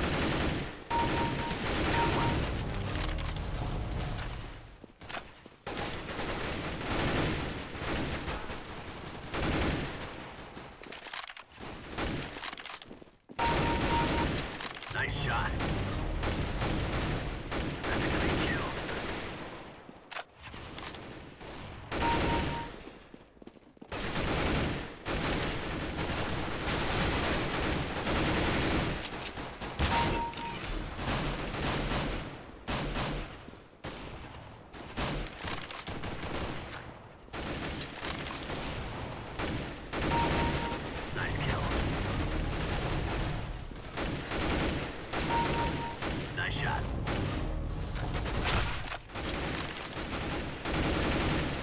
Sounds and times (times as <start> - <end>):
Speech: 14.9 - 15.6, 17.9 - 18.9, 41.2 - 41.8, 46.4 - 46.8.